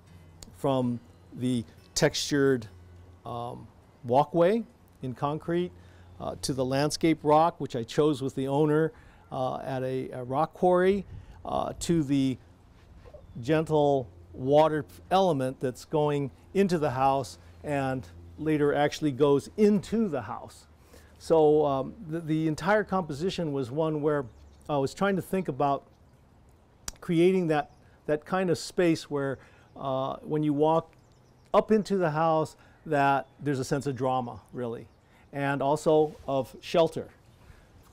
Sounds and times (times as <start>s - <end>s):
Speech: 0.5s - 2.7s, 3.3s - 12.4s, 13.4s - 25.9s, 26.9s - 30.9s, 31.5s - 37.2s.